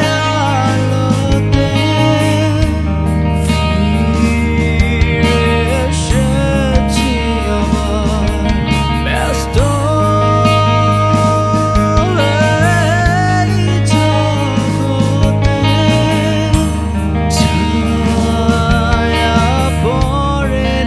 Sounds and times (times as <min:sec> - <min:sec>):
Music: 0:00.0 - 0:20.8.